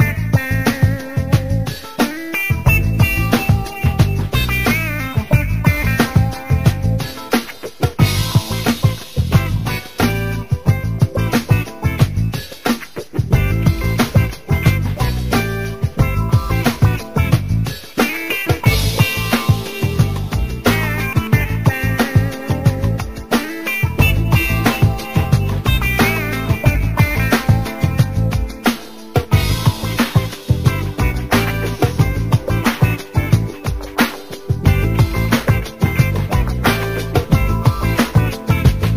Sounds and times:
Music: 0.0 - 38.9.

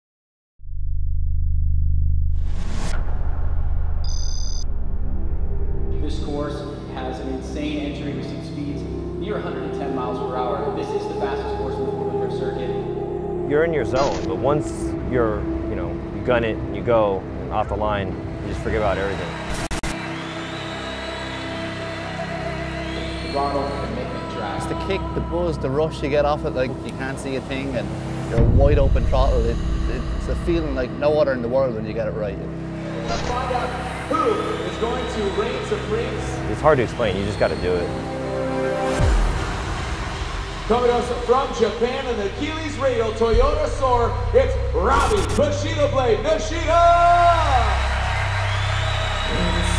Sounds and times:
Music: 4.6 - 49.7
Speech: 6.0 - 12.8, 13.5 - 19.3, 23.3 - 32.4, 33.1 - 37.9, 40.7 - 47.6.

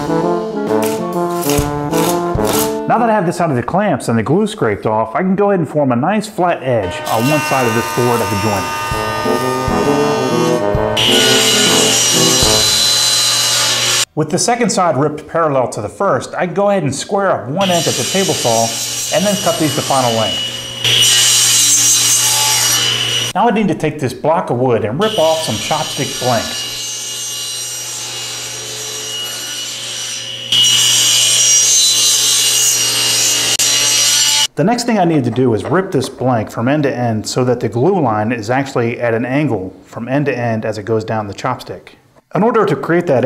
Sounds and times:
Speech: 2.9 - 8.7, 14.2 - 20.4, 23.4 - 26.6, 34.6 - 43.2.

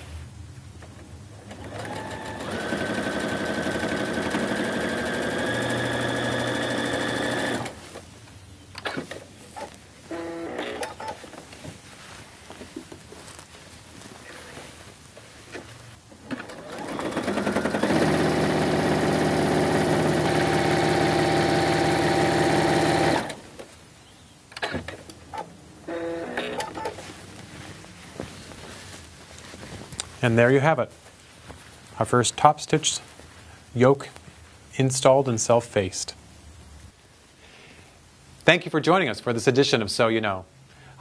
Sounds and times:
Sewing machine: 1.5 - 7.8, 16.3 - 23.4.

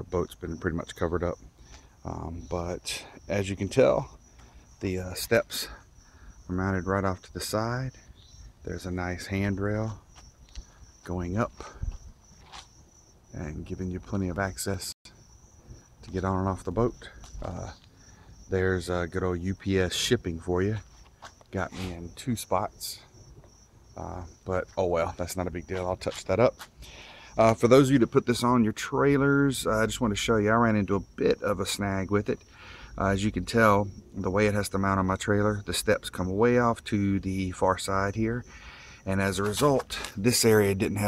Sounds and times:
Speech: 0.0 - 1.4, 2.0 - 4.1, 4.8 - 5.8, 6.5 - 8.0, 8.6 - 10.0, 11.1 - 11.7, 13.4 - 15.0, 16.0 - 17.8, 18.5 - 20.8, 21.6 - 23.1, 24.0 - 26.6, 27.4 - 32.4, 33.0 - 41.0.

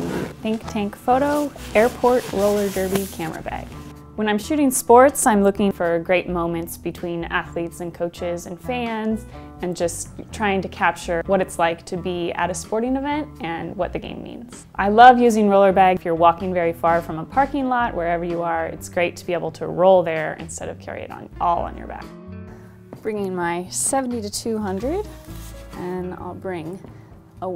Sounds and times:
Music: 0.0 - 27.5
Speech: 0.4 - 22.1, 23.0 - 25.1, 25.8 - 26.8.

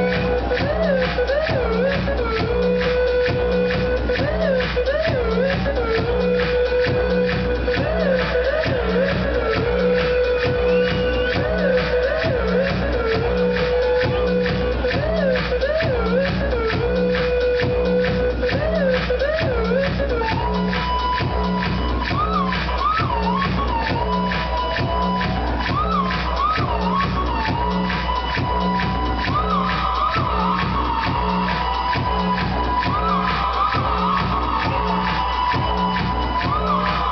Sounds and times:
Music: 0.0 - 37.1.

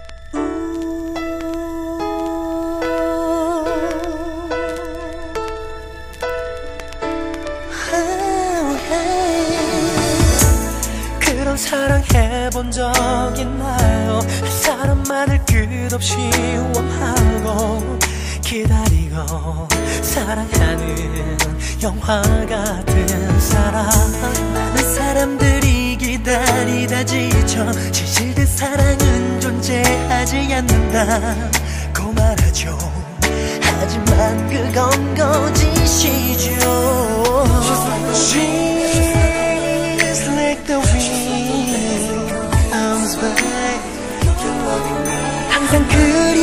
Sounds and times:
Pop music: 0.0 - 46.4
Singing: 7.8 - 46.4.

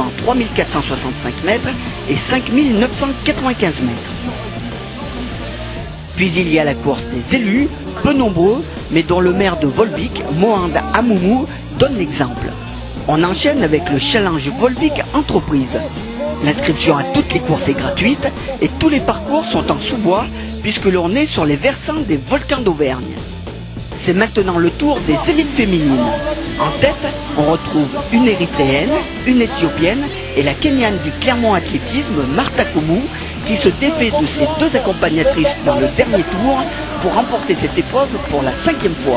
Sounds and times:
Speech: 0.0 - 4.4, 6.2 - 23.2, 24.0 - 39.1
Outside, urban or manmade: 0.0 - 21.7
Music: 0.0 - 39.1.

